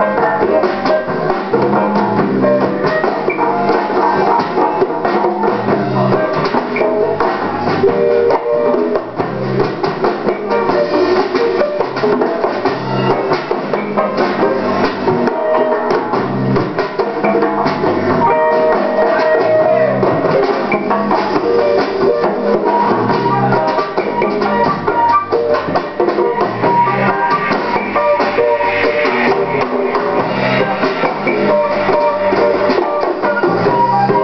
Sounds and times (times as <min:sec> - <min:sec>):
Drum: 0:00.0 - 0:34.2
Steelpan: 0:00.0 - 0:34.2.